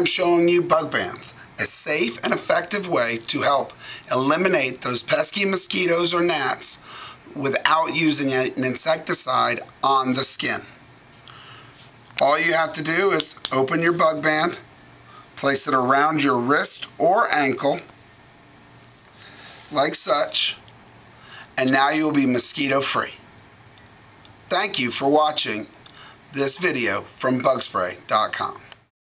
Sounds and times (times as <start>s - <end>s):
Speech: 0.0s - 10.8s, 12.2s - 14.7s, 15.4s - 17.9s, 19.7s - 20.6s, 21.6s - 23.2s, 24.5s - 28.8s.